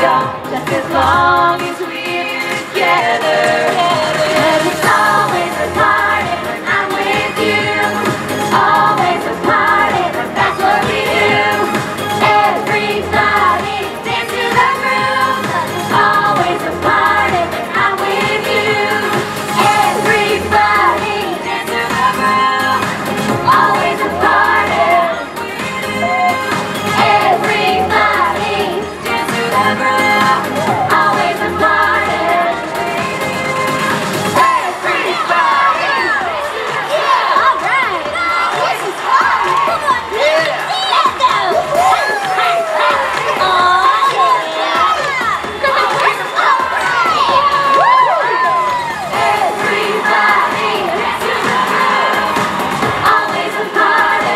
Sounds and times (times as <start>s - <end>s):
Inside, large room or hall: 0.0s - 54.3s
Music: 0.0s - 54.3s
Speech: 35.7s - 47.6s.